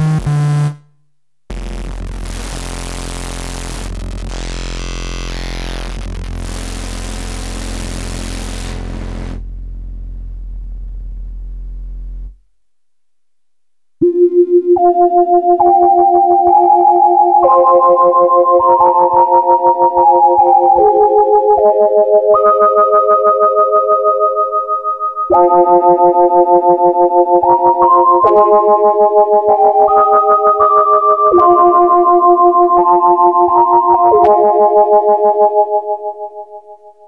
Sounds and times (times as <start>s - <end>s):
Synthesizer: 1.5s - 9.6s, 14.0s - 37.0s.